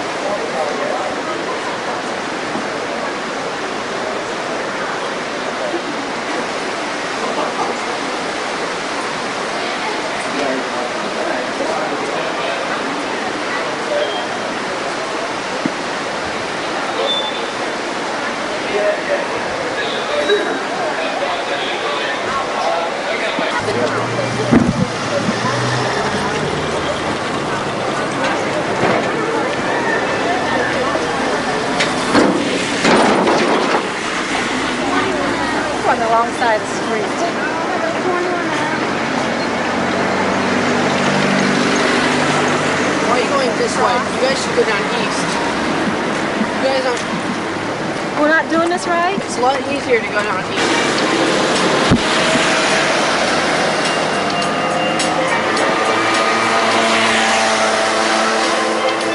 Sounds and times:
Speech: 0.0 - 32.7, 34.8 - 41.0, 41.7 - 45.7, 48.1 - 51.4.

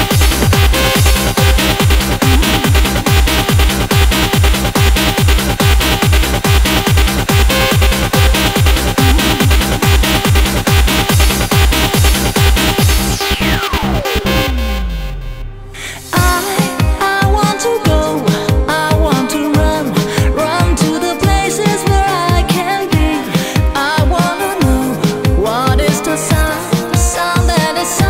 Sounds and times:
Techno: 0.0 - 28.1
Trance music: 0.0 - 28.1.

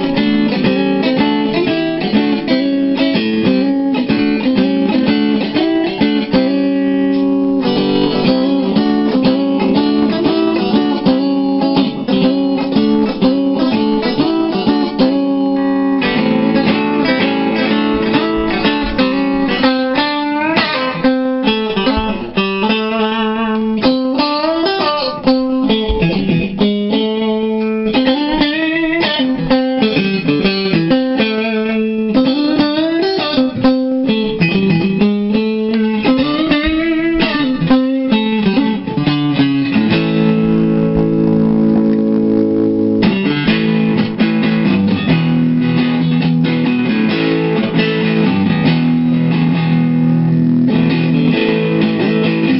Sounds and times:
Electric guitar: 0.0 - 52.5
Strum: 0.0 - 52.5.

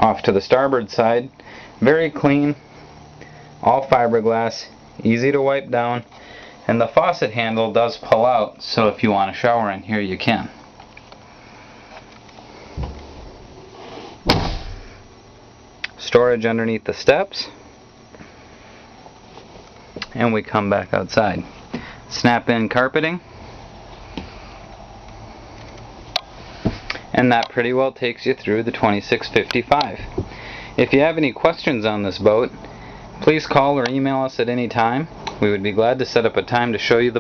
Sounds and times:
Speech: 0.0 - 2.6, 3.6 - 6.1, 6.7 - 10.6, 15.9 - 17.6, 20.0 - 21.5, 22.1 - 23.2, 27.1 - 30.1, 30.8 - 32.6, 33.2 - 37.2.

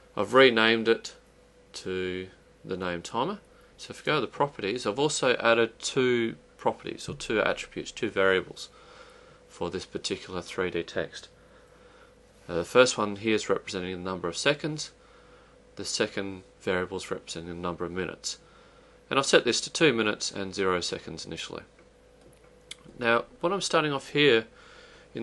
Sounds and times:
Speech: 0.2 - 8.8, 9.5 - 11.3, 12.5 - 15.0, 15.8 - 18.4, 19.1 - 21.7, 22.7 - 24.5.

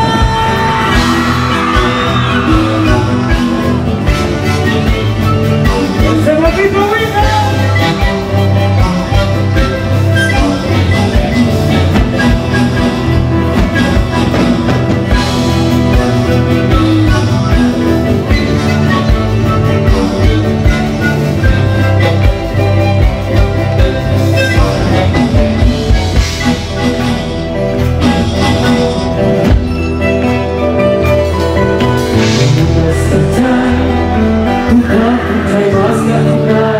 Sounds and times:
Music: 0.0 - 36.7.

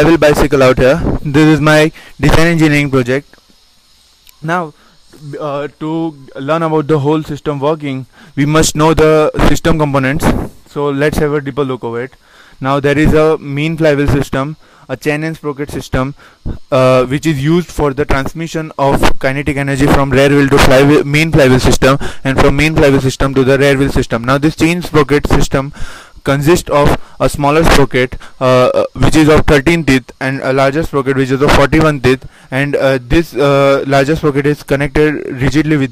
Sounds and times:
Speech: 0.0 - 3.4, 4.3 - 35.9.

